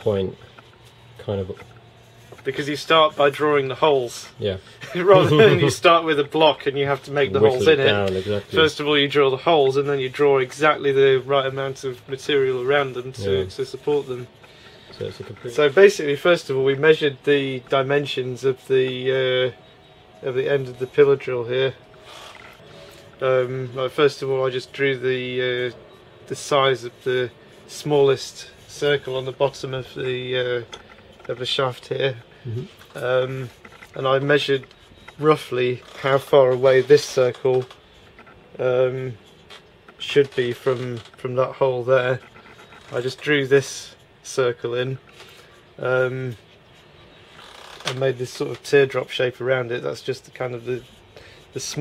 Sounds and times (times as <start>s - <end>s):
Speech: 0.0s - 0.4s, 2.4s - 14.3s, 15.0s - 19.6s, 20.2s - 21.8s, 23.2s - 30.7s, 31.3s - 37.7s, 40.0s - 42.2s, 42.9s - 45.0s, 45.8s - 46.4s, 47.9s - 50.9s, 51.6s - 51.8s.